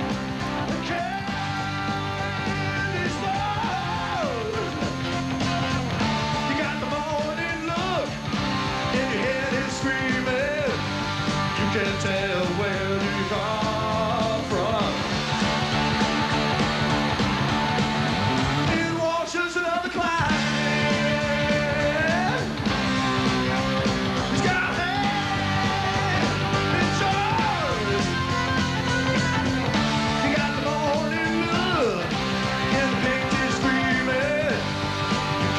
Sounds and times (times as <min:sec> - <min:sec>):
Music: 0:00.0 - 0:35.5.